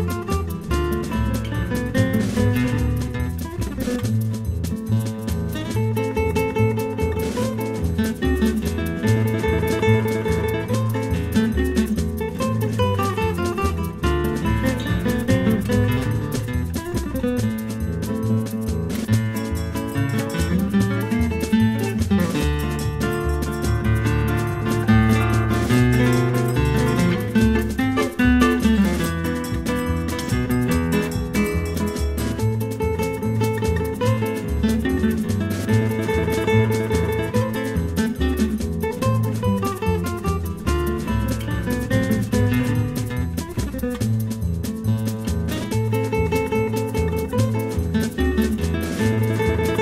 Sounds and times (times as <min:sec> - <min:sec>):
Electric guitar: 0:00.0 - 0:49.8.